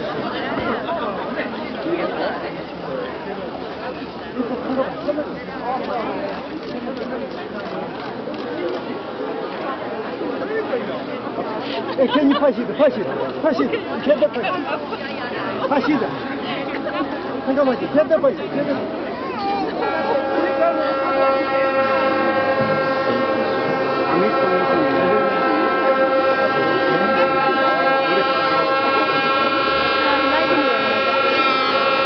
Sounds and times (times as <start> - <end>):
Chatter: 0.0 - 32.0
Outside, urban or manmade: 0.0 - 32.0.